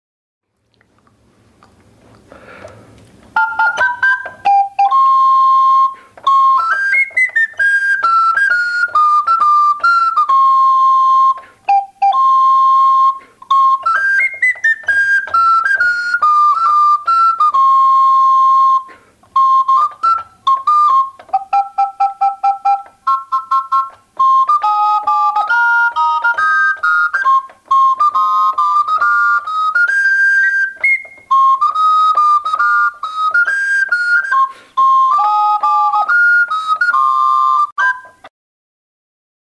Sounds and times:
Inside, small room: 0:00.4 - 0:38.3
Keyboard (musical): 0:02.3 - 0:38.3.

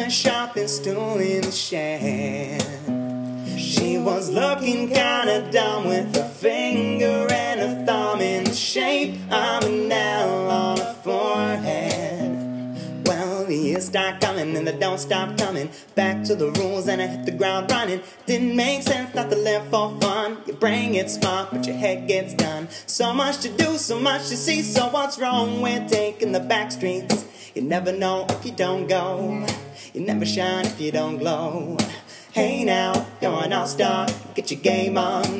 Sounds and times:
Music: 0:00.0 - 0:35.4.

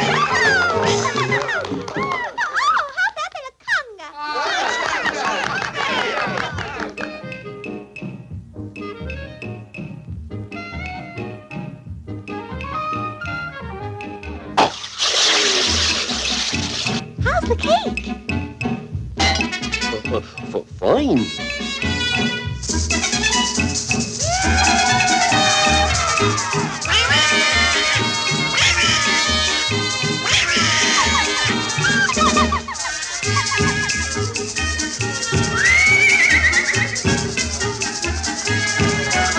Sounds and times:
Music: 0:00.0 - 0:02.6, 0:04.5 - 0:39.3
Speech: 0:17.2 - 0:18.0, 0:19.9 - 0:21.4.

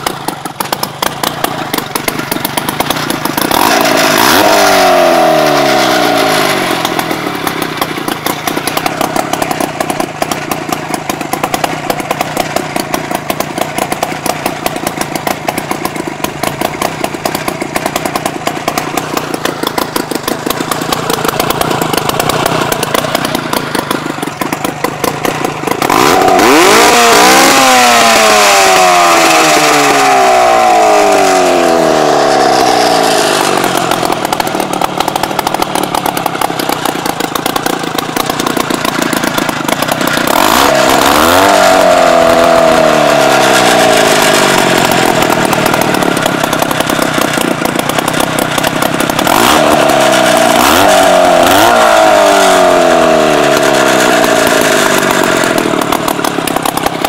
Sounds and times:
Idling: 0:00.0 - 0:57.0
Vehicle: 0:00.0 - 0:57.0.

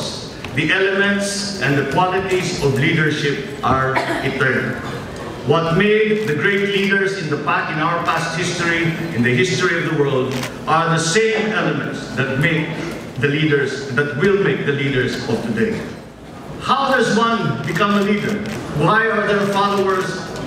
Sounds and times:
Male speech, man speaking: 0:00.0 - 0:04.8, 0:05.5 - 0:16.0, 0:16.6 - 0:20.3
Narration, monologue: 0:00.0 - 0:20.4.

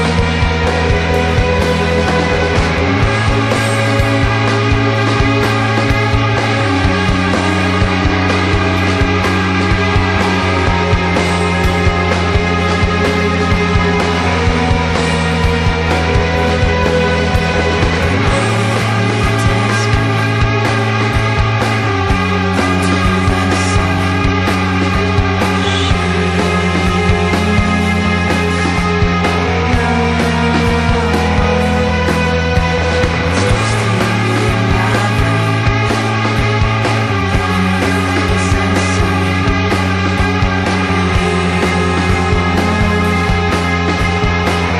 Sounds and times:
Music: 0:00.0 - 0:44.7.

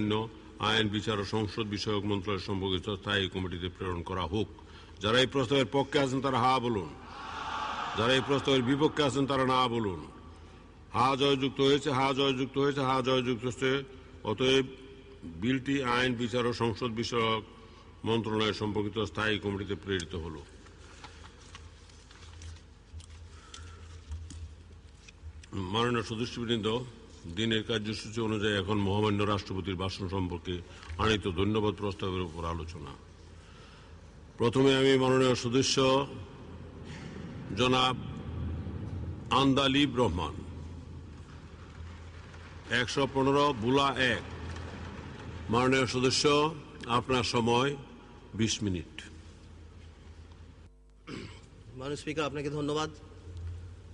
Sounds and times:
Male speech, man speaking: 0:00.0 - 0:07.0, 0:07.9 - 0:10.1, 0:11.0 - 0:14.7, 0:15.3 - 0:17.4, 0:18.0 - 0:20.5, 0:25.5 - 0:33.0, 0:34.4 - 0:36.2, 0:37.5 - 0:38.0, 0:39.3 - 0:40.4, 0:42.7 - 0:44.3, 0:45.5 - 0:49.1, 0:51.8 - 0:53.0
Narration, monologue: 0:00.0 - 0:53.9.

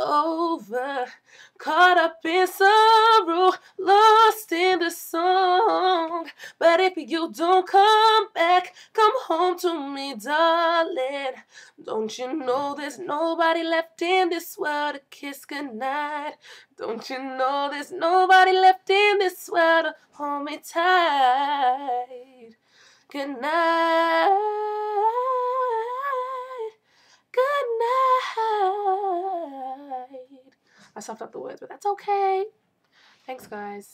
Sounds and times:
Female singing: 0:00.0 - 0:32.5.

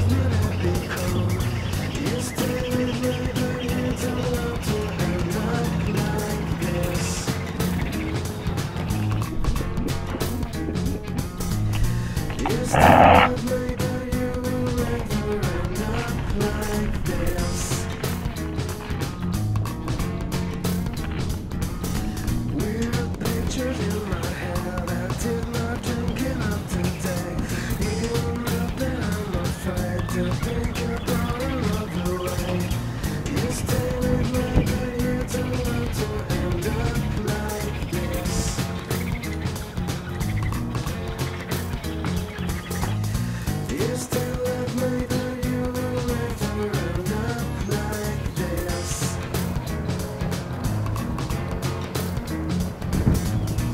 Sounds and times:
Music: 0:00.0 - 0:53.7.

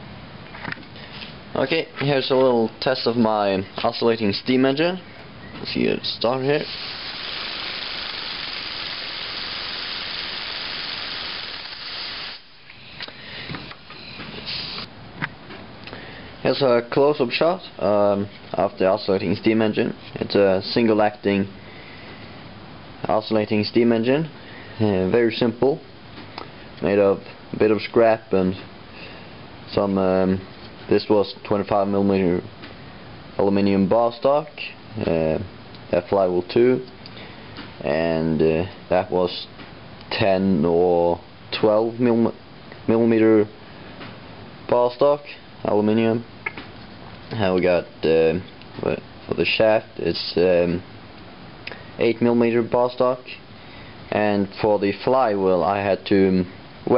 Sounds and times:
Speech: 0:01.5 - 0:05.0, 0:05.6 - 0:06.7, 0:16.4 - 0:21.5, 0:23.0 - 0:25.9, 0:26.8 - 0:28.7, 0:29.7 - 0:32.5, 0:33.4 - 0:36.9, 0:37.8 - 0:39.5, 0:40.1 - 0:43.6, 0:44.7 - 0:46.3, 0:47.3 - 0:50.8, 0:52.0 - 0:53.4, 0:54.1 - 0:56.9.

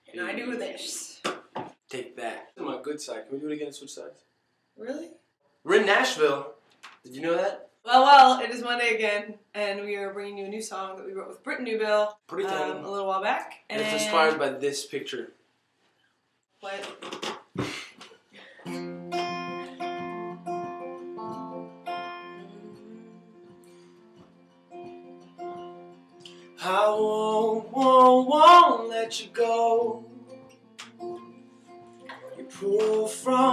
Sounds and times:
Speech: 0:01.9 - 0:04.2, 0:05.7 - 0:06.5, 0:07.1 - 0:15.3, 0:16.6 - 0:17.0
Music: 0:18.6 - 0:33.5.

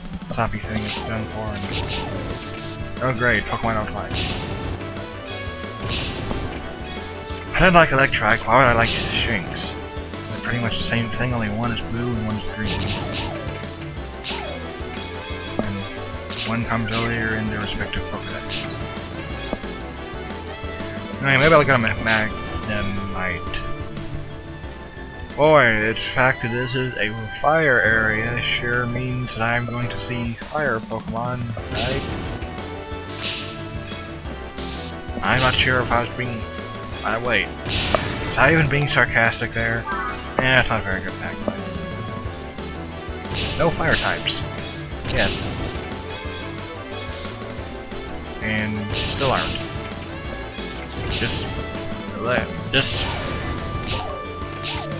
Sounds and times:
Music: 0:00.0 - 0:54.9
Speech: 0:00.3 - 0:02.2, 0:03.0 - 0:04.2, 0:07.6 - 0:13.2, 0:16.4 - 0:18.7, 0:21.2 - 0:23.6, 0:25.4 - 0:32.0, 0:35.2 - 0:37.5, 0:38.4 - 0:41.5, 0:43.6 - 0:44.4, 0:45.1 - 0:45.4, 0:48.4 - 0:49.6, 0:51.2 - 0:51.5, 0:52.2 - 0:53.1.

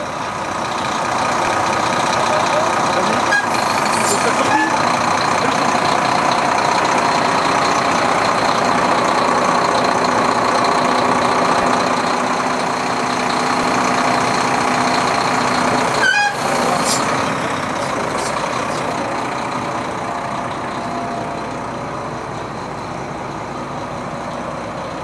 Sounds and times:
Vehicle: 0:00.0 - 0:25.0.

